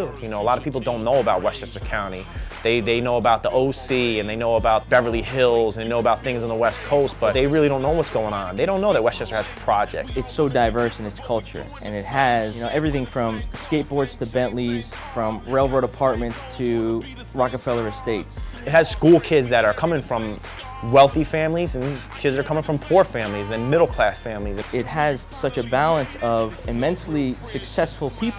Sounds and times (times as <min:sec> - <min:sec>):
Music: 0:00.0 - 0:28.3
Speech: 0:00.0 - 0:28.3.